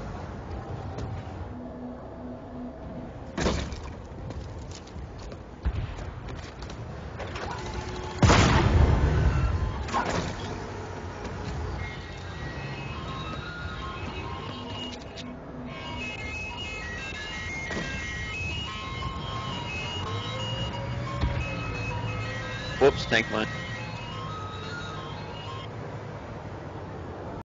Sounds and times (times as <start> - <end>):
Music: 11.8 - 25.7.